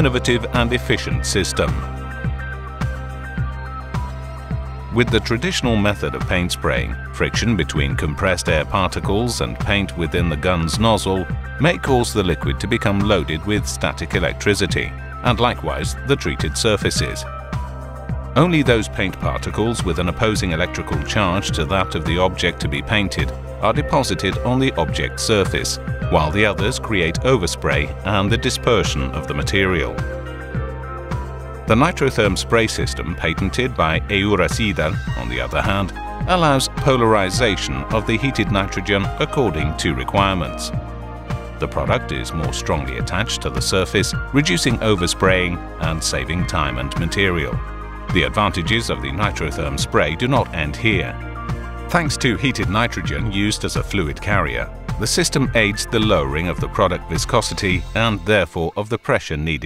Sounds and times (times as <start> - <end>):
Speech: 0.0 - 1.9, 4.9 - 17.3, 18.4 - 30.1, 31.7 - 40.8, 41.6 - 51.2, 51.9 - 59.6.